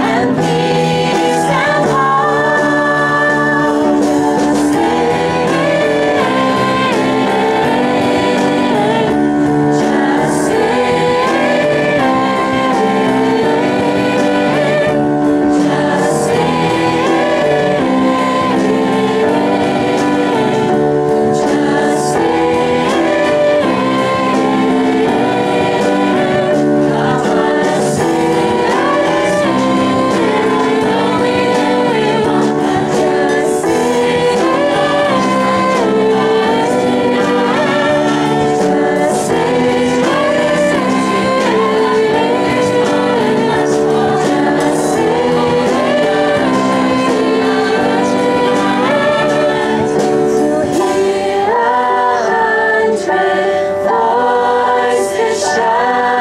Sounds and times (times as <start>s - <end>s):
Gospel music: 0.0s - 56.2s
Singing: 0.0s - 56.2s.